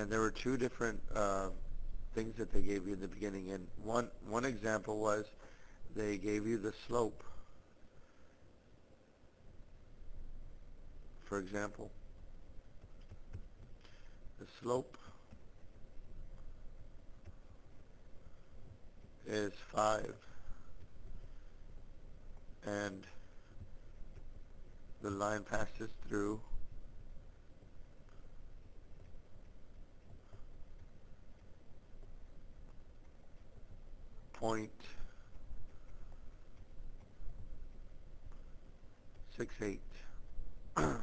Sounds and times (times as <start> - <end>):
Speech: 0.0 - 7.3, 11.2 - 12.0, 14.4 - 15.0, 19.2 - 20.3, 22.6 - 23.2, 25.0 - 26.5, 34.4 - 35.1, 39.3 - 40.1.